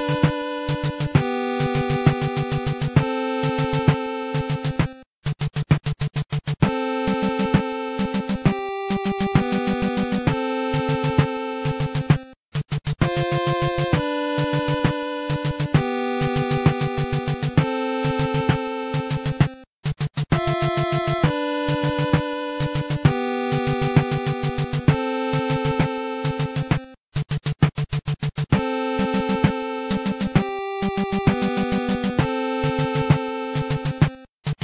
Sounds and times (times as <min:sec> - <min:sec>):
Music: 0:00.0 - 0:34.6.